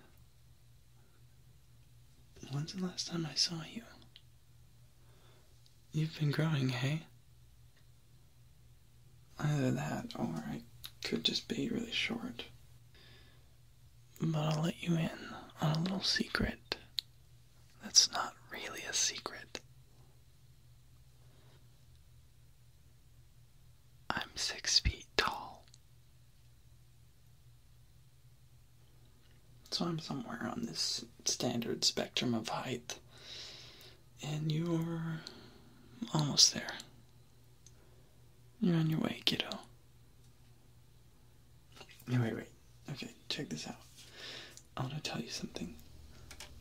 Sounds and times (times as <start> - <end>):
Speech: 2.4 - 4.1, 5.9 - 7.2, 9.4 - 12.6, 14.2 - 16.9, 17.8 - 19.6, 29.7 - 33.0, 34.2 - 37.0, 38.6 - 39.7, 41.8 - 43.9, 44.8 - 45.8.